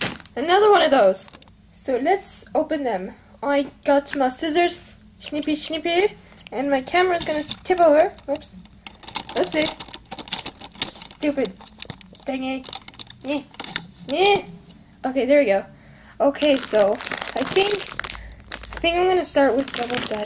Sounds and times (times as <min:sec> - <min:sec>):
Speech: 0:00.4 - 0:08.6, 0:09.4 - 0:09.8, 0:10.8 - 0:11.6, 0:15.1 - 0:17.9, 0:18.8 - 0:20.2.